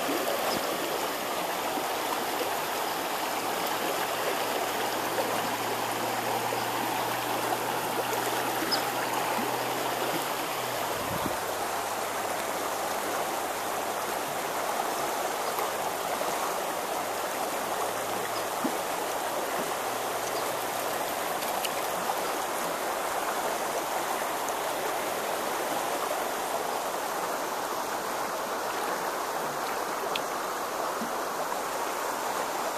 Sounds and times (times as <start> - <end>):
Stream: 0.0 - 32.7.